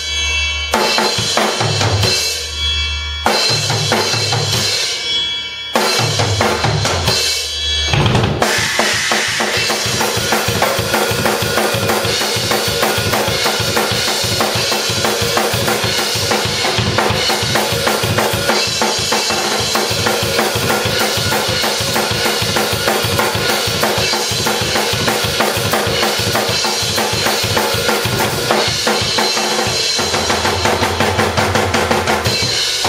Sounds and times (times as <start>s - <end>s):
Drum kit: 0.0s - 32.8s
Bass drum: 7.9s - 12.1s.